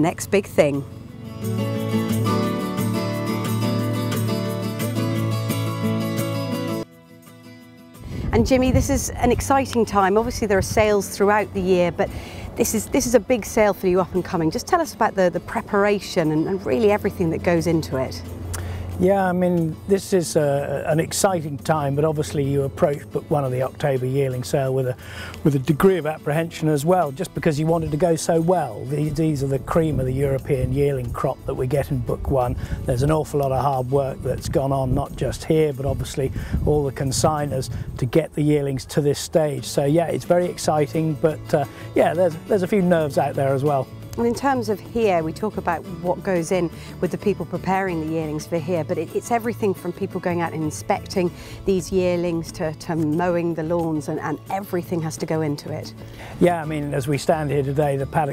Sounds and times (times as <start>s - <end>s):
Music: 0.0s - 58.3s.